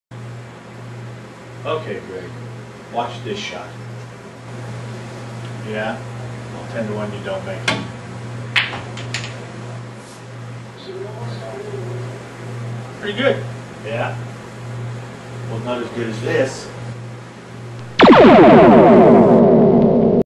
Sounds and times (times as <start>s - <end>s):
Speech: 1.6s - 3.8s, 5.6s - 7.8s, 10.8s - 12.2s, 13.0s - 14.2s, 15.5s - 16.8s
Burst, pop: 17.8s - 20.1s.